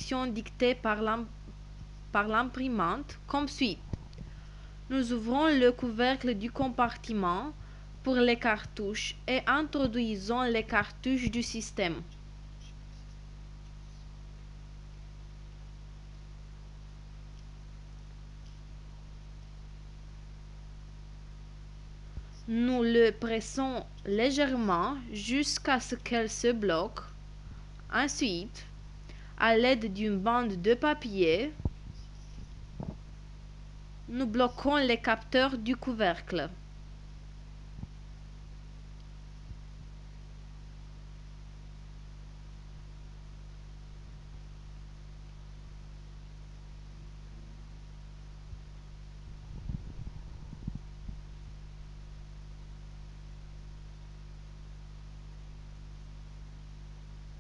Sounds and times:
Speech: 0.0s - 1.3s, 2.2s - 3.8s, 4.9s - 12.1s, 22.4s - 27.2s, 27.9s - 28.7s, 29.4s - 31.6s, 34.1s - 36.6s.

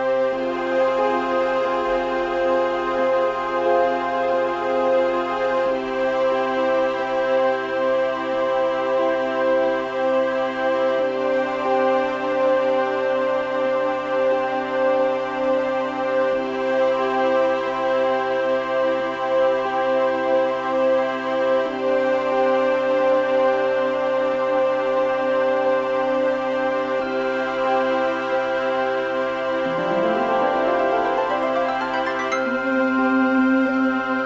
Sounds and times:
Background music: 0.0s - 34.2s.

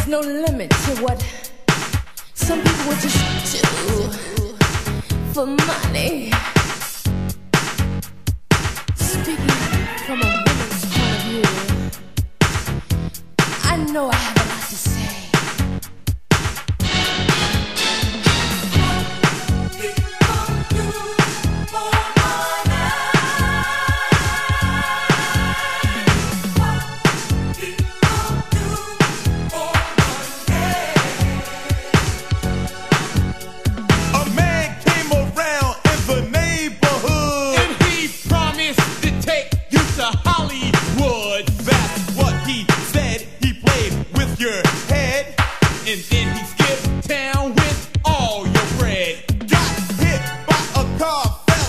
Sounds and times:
Music: 0.0s - 51.6s.

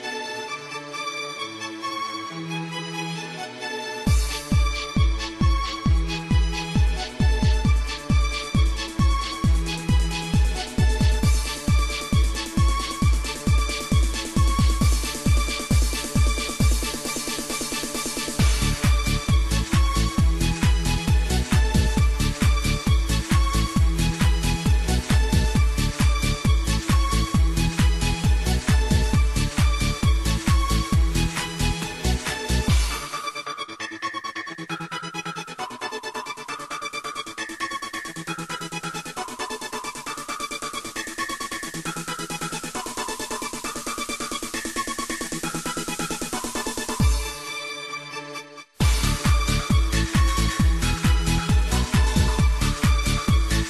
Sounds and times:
Techno: 0.0s - 48.2s, 48.8s - 53.7s
Trance music: 0.0s - 53.7s.

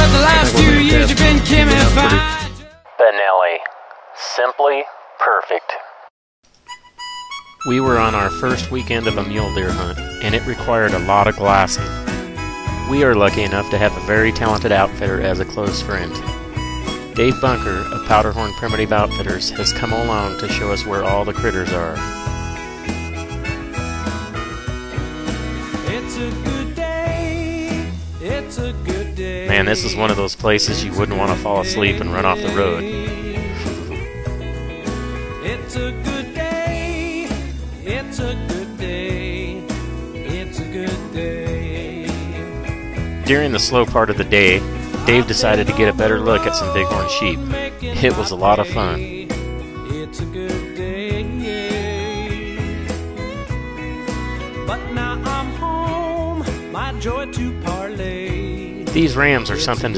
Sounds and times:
Music: 0.0s - 2.9s, 6.6s - 59.9s
Speech: 2.0s - 2.3s, 3.0s - 5.9s, 7.7s - 11.9s, 12.9s - 16.2s, 17.2s - 22.0s, 29.5s - 34.0s, 43.3s - 49.2s, 58.9s - 59.9s.

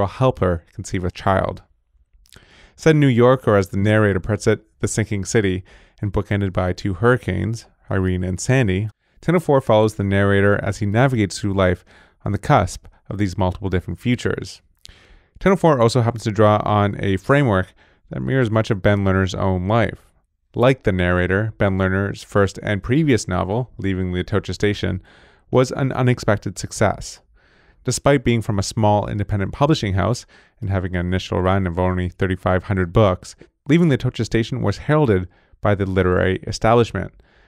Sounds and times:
Speech: 0.0s - 1.7s, 2.8s - 14.6s, 15.4s - 27.2s, 27.8s - 37.2s.

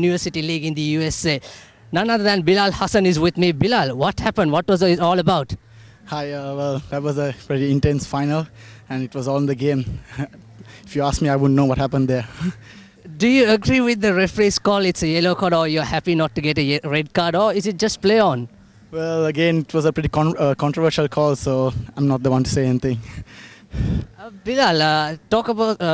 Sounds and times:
Speech: 13.1s - 23.0s, 24.2s - 25.9s.

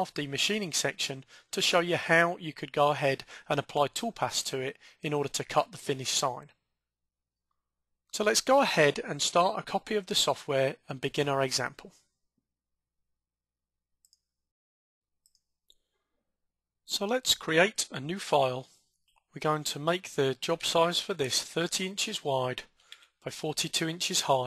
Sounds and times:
Speech: 0.0s - 6.6s, 8.1s - 12.0s, 16.9s - 18.7s, 19.4s - 22.7s, 23.3s - 24.4s.

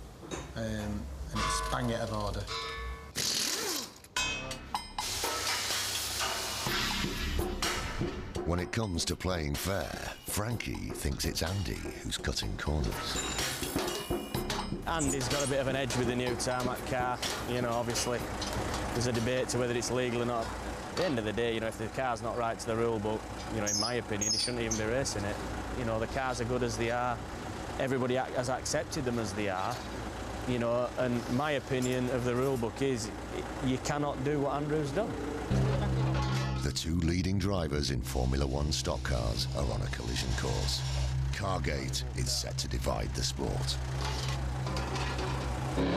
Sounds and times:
Speech: 0.6s - 2.5s, 8.4s - 13.2s, 14.9s - 18.2s, 19.0s - 27.2s, 27.8s - 29.8s, 30.5s - 35.1s, 36.6s - 43.8s
Music: 4.4s - 20.3s, 35.1s - 45.9s.

